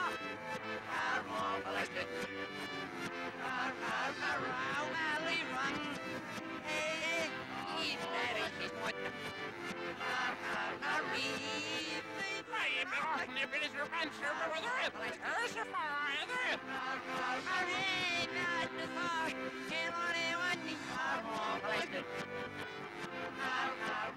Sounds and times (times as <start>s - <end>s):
Music: 0.0s - 24.1s
Speech: 11.5s - 16.6s.